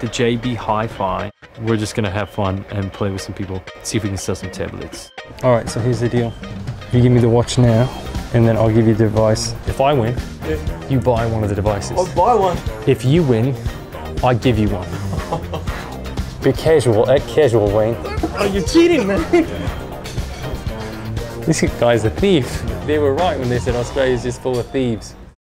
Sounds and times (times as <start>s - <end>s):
Speech: 0.0s - 6.3s, 6.9s - 13.6s, 14.2s - 14.9s, 16.4s - 19.4s, 21.5s - 25.2s
Music: 0.0s - 25.4s.